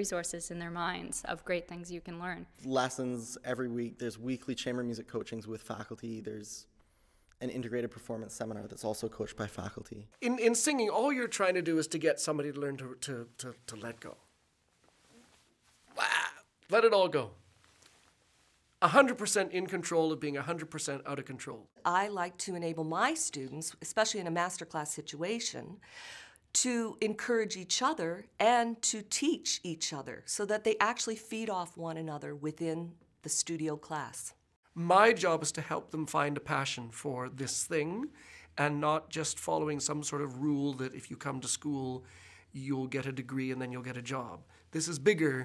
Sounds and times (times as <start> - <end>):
Speech: 0.0 - 6.7, 7.4 - 14.2, 16.0 - 17.4, 26.6 - 42.0, 42.6 - 45.4.